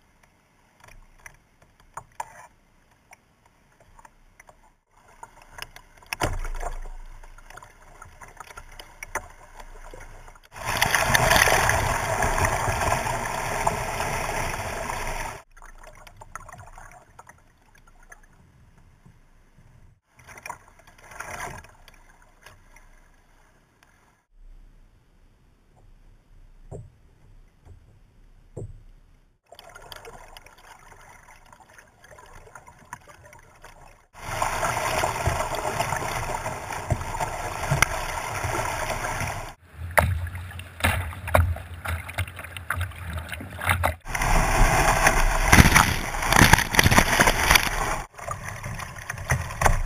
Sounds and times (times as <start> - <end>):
Rowboat, canoe, kayak: 0.0 - 49.8.